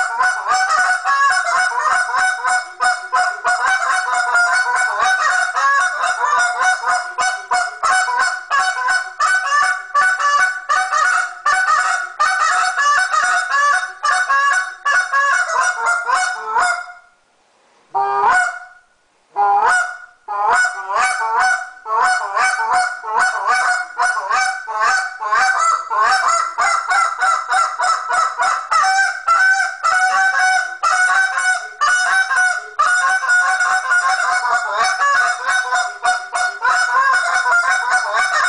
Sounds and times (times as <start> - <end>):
Honk: 0.0 - 17.0, 18.0 - 18.8, 19.4 - 38.4.